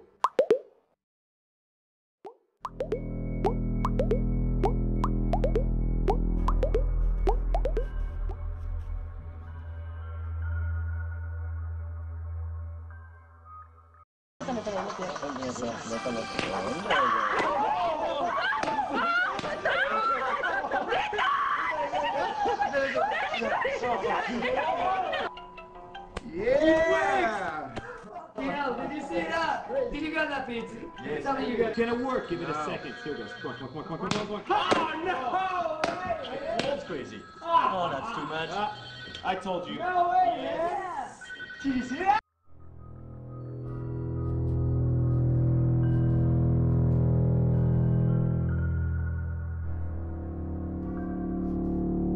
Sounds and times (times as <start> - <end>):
Plop: 0.2 - 0.7, 2.3 - 7.9
Music: 2.7 - 14.0, 15.2 - 19.3, 25.3 - 27.6, 28.5 - 32.3, 42.4 - 52.1.